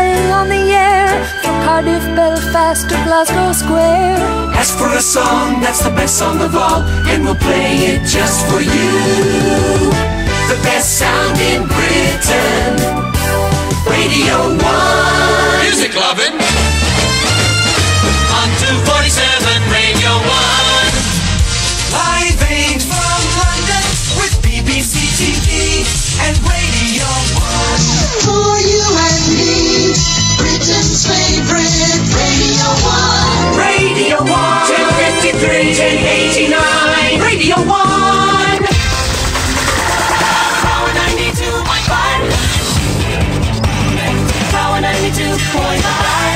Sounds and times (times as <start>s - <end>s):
Exciting music: 0.1s - 46.3s.